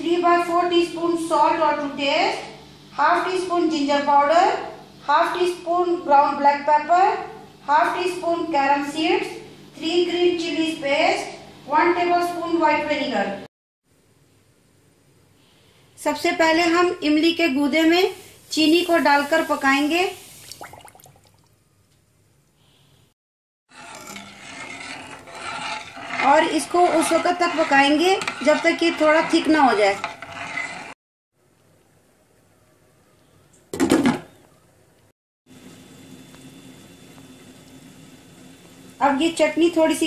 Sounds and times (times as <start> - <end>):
Speech: 0.0 - 13.5, 16.0 - 20.2, 26.2 - 30.0, 39.0 - 40.0.